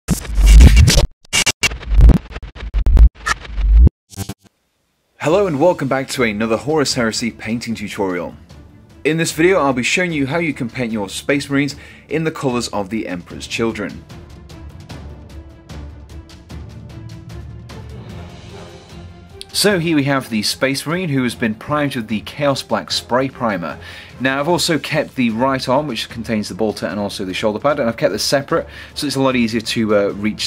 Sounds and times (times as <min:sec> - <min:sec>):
Speech: 0:05.2 - 0:08.4, 0:09.0 - 0:14.0, 0:19.4 - 0:30.4
Music: 0:05.2 - 0:30.4.